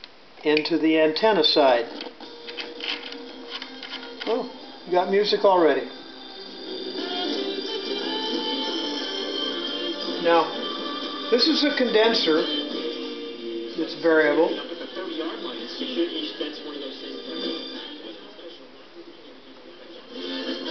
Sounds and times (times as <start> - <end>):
Speech: 0.4 - 1.9, 4.2 - 5.9, 10.2 - 10.6, 11.4 - 12.5, 13.8 - 20.1
Music: 1.2 - 20.7.